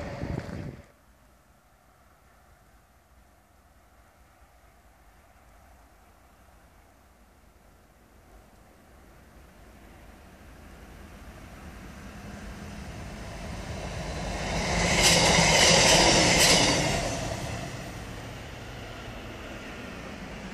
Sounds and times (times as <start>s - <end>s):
Vehicle: 0.0s - 20.5s.